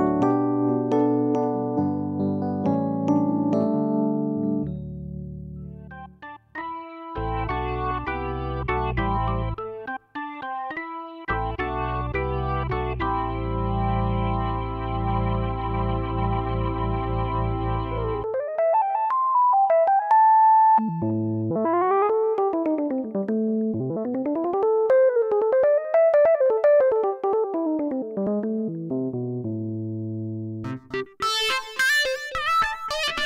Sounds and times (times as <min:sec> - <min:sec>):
Music: 0:00.0 - 0:33.2.